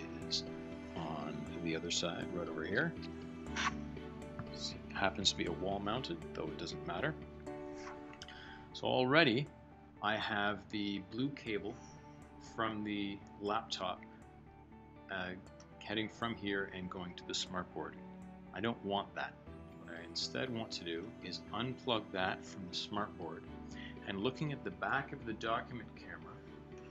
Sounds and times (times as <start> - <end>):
Speech: 0.0 - 0.4, 1.0 - 3.0, 4.6 - 7.2, 8.8 - 11.8, 12.6 - 14.0, 15.1 - 18.0, 18.6 - 19.3, 19.9 - 23.4, 24.0 - 26.4
Music: 0.0 - 26.9.